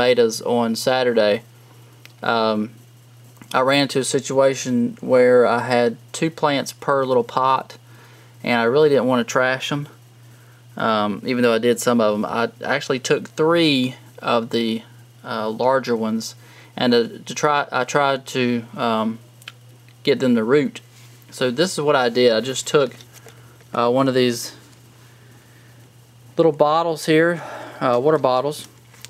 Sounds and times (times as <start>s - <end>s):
Speech: 0.0s - 1.5s, 2.2s - 2.8s, 3.5s - 7.8s, 8.4s - 10.0s, 10.8s - 19.2s, 20.0s - 23.0s, 23.7s - 24.6s, 26.4s - 28.7s.